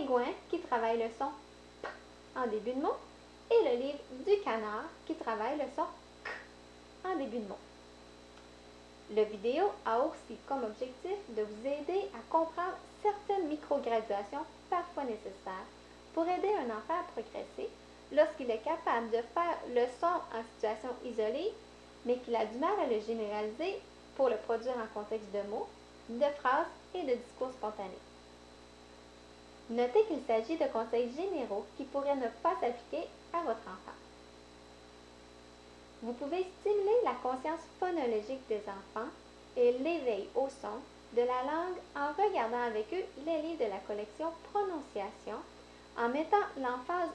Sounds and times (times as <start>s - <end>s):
Speech: 0.0s - 1.4s, 2.4s - 7.7s, 9.1s - 28.1s, 29.7s - 34.1s, 36.0s - 47.1s.